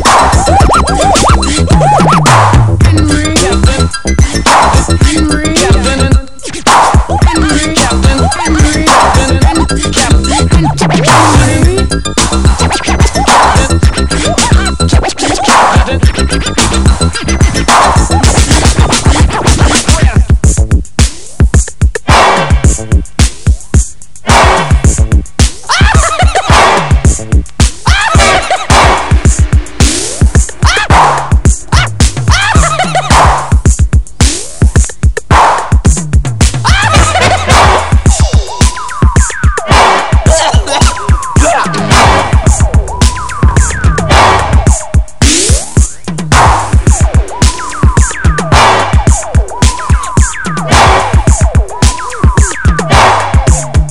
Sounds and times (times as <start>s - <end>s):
Scratching (performance technique): 0.0s - 53.9s.